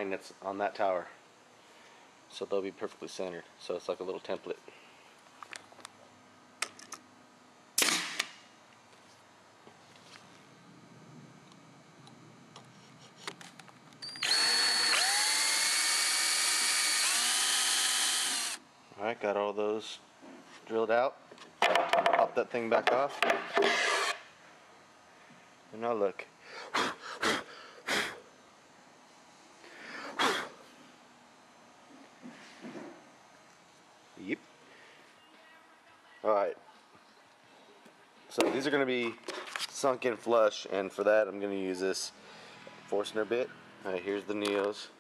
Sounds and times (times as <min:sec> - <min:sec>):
Drill: 0:14.0 - 0:18.6, 0:23.7 - 0:24.2.